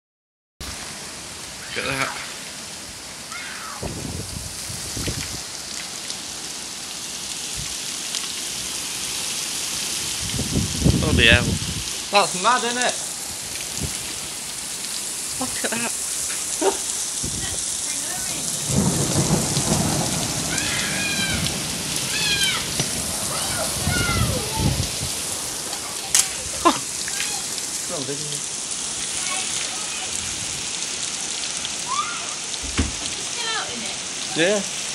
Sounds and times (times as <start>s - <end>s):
Rain on surface: 0.6s - 34.9s.